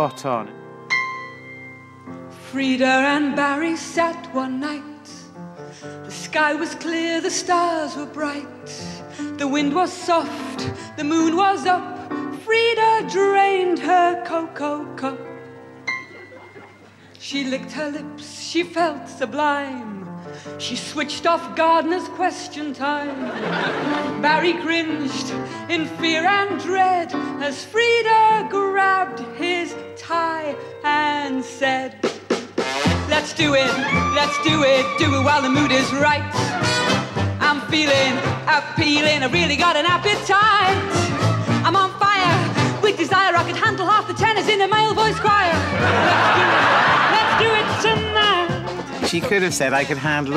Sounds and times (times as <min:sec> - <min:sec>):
Music: 0:00.0 - 0:50.3.